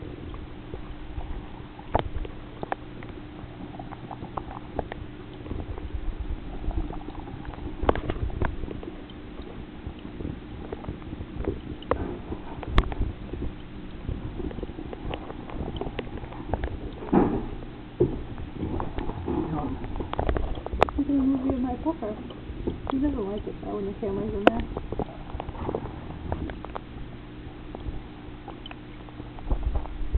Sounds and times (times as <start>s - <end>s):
Speech: 19.3s - 19.8s, 21.0s - 22.3s, 22.9s - 24.7s.